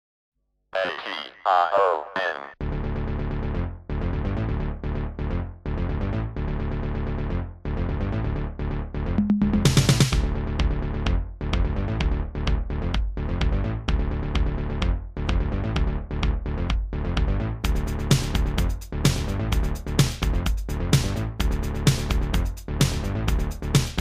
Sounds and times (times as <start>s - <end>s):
Speech: 0.8s - 2.6s.